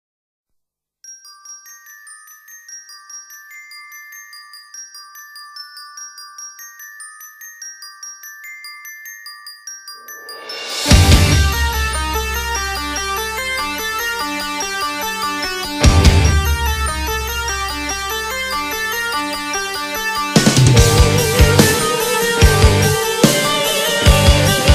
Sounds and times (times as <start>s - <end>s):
Glockenspiel: 1.0s - 24.7s
Marimba, xylophone: 1.1s - 24.7s.